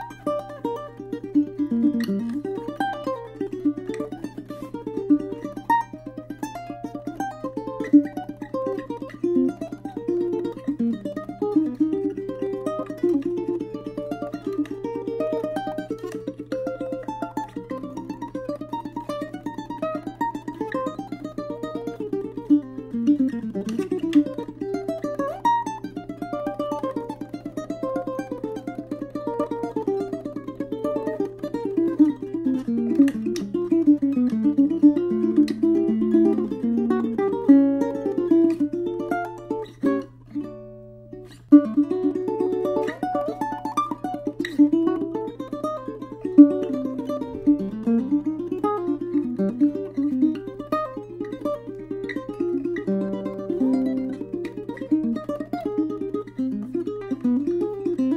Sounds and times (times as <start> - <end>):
Pizzicato: 0.0 - 58.1.